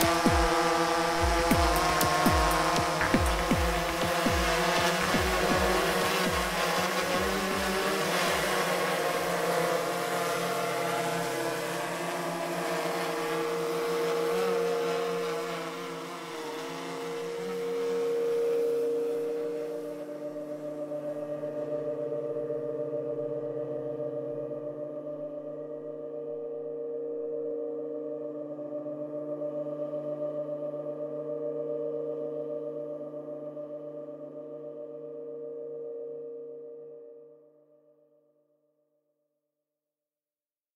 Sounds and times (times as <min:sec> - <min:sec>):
Singing bowl: 0:00.0 - 0:38.4.